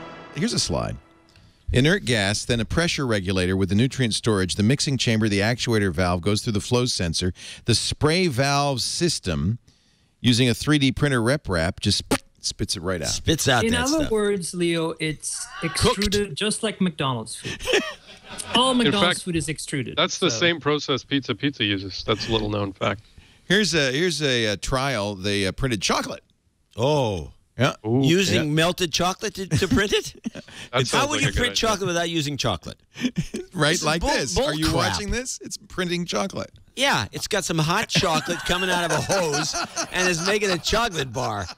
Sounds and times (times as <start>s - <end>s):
Speech: 0.4s - 1.0s, 1.7s - 9.6s, 10.2s - 17.4s, 18.4s - 26.2s, 26.8s - 41.5s.